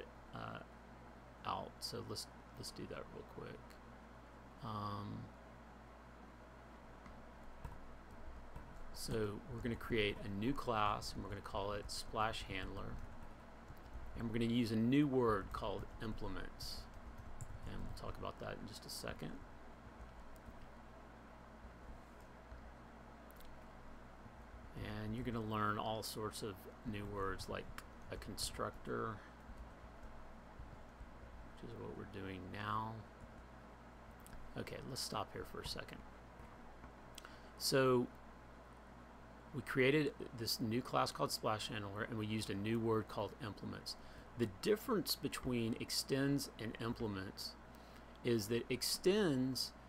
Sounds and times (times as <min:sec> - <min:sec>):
Speech: 0:00.0 - 0:00.7, 0:01.4 - 0:03.8, 0:04.6 - 0:05.3, 0:08.9 - 0:13.1, 0:14.2 - 0:16.9, 0:17.6 - 0:19.5, 0:24.7 - 0:29.3, 0:31.6 - 0:33.1, 0:34.5 - 0:36.0, 0:37.6 - 0:38.2, 0:39.5 - 0:47.6, 0:48.2 - 0:49.8.